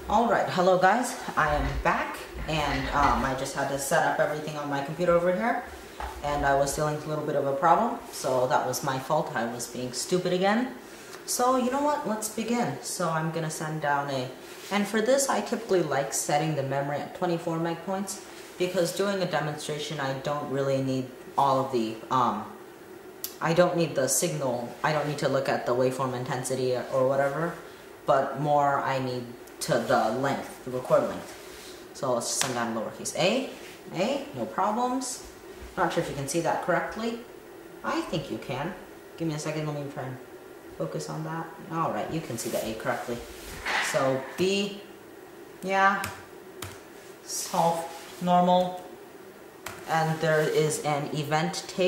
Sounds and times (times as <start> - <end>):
Inside, small room: 0.0 - 51.8
Speech: 0.1 - 22.6, 23.3 - 31.4, 32.0 - 40.2, 40.8 - 44.9, 45.6 - 46.2, 47.2 - 48.9, 49.9 - 51.8.